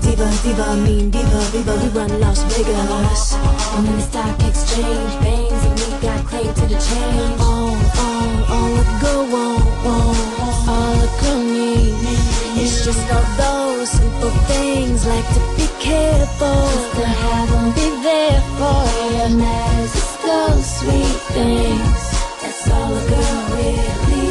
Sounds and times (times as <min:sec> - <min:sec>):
Music: 0:00.0 - 0:24.3.